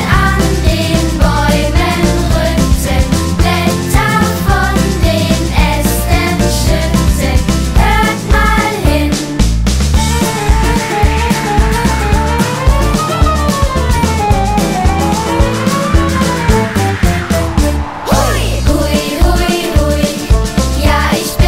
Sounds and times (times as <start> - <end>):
Video game music: 9.2 - 20.8.